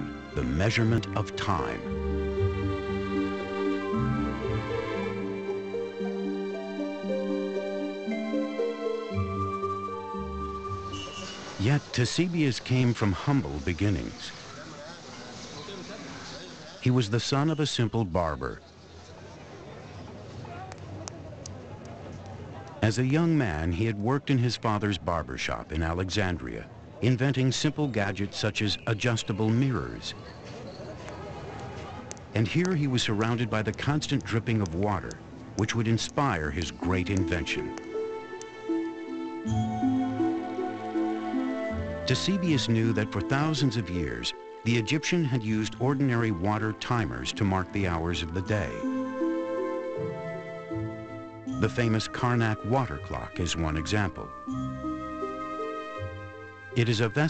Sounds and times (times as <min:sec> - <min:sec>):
Speech: 0:00.4 - 0:01.8, 0:11.6 - 0:18.7, 0:22.3 - 0:30.2, 0:31.8 - 0:37.8, 0:42.1 - 0:48.8, 0:51.6 - 0:54.3, 0:56.8 - 0:57.2.